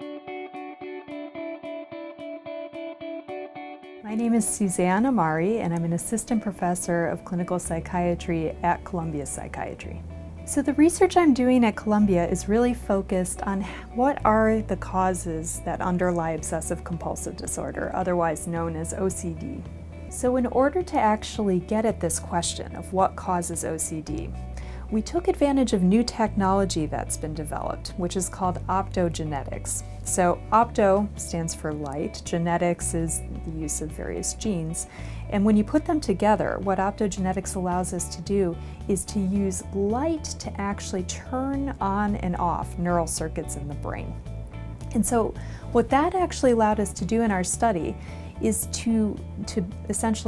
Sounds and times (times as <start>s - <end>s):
Music: 0.0s - 50.2s
Speech: 4.1s - 24.3s, 24.9s - 44.2s, 44.9s - 50.2s.